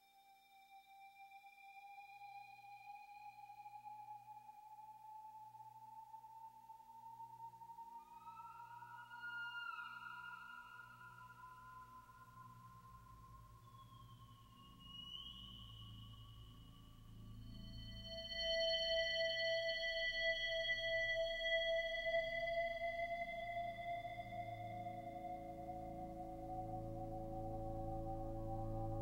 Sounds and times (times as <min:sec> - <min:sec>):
Ambient music: 0:16.4 - 0:29.0.